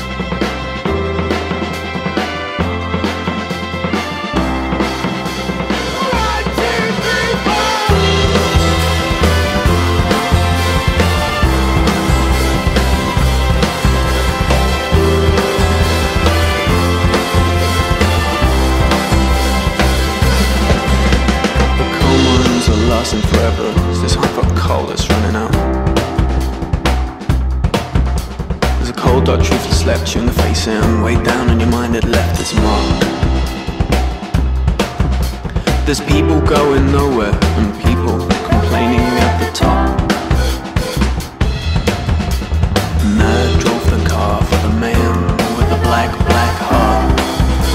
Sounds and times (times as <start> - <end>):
Music: 0.0 - 47.7.